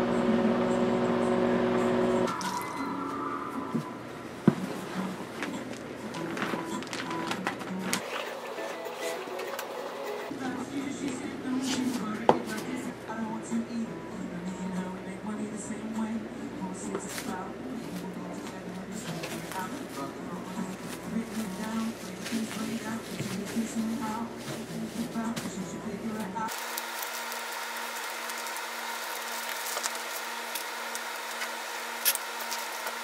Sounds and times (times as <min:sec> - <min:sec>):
Music: 0:00.1 - 0:26.5.